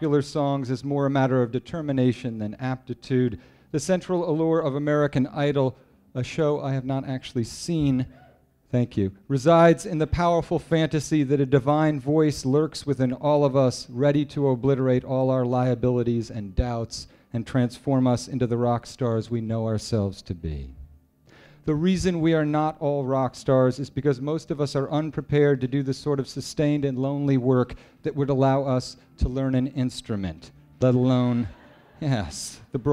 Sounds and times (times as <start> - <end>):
Speech: 0.0 - 20.8, 21.7 - 32.9.